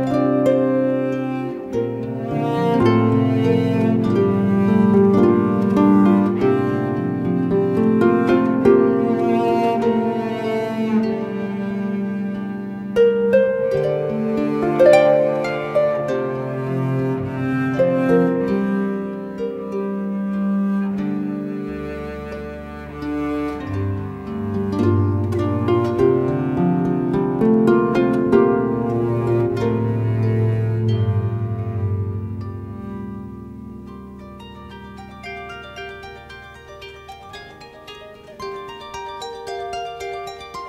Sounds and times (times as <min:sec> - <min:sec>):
Harp: 0:00.0 - 0:40.6.